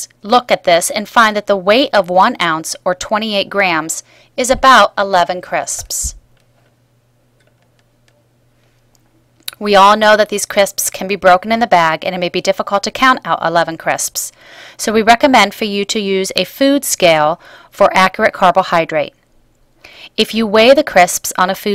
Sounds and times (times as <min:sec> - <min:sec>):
Speech: 0:00.0 - 0:06.2, 0:09.5 - 0:19.2, 0:20.2 - 0:21.7.